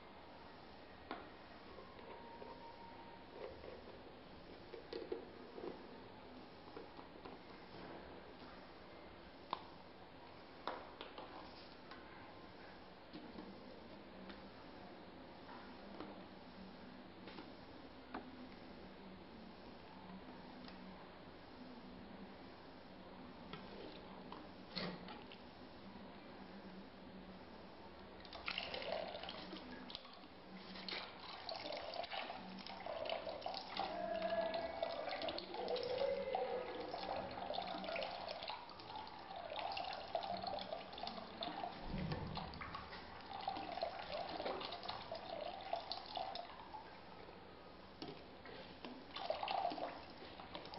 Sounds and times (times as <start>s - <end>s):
Water: 28.2s - 47.2s, 48.8s - 50.7s
Water tap, faucet: 31.2s - 46.6s, 49.1s - 50.7s.